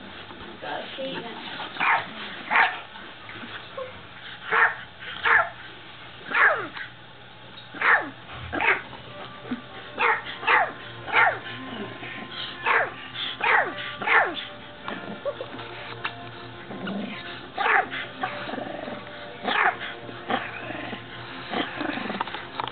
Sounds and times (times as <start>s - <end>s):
Bark: 1.8s - 2.8s, 4.5s - 5.5s, 6.3s - 6.8s, 7.8s - 8.8s, 10.0s - 11.4s, 12.7s - 14.4s, 17.6s - 17.9s, 19.5s - 19.8s
Music: 7.4s - 22.7s.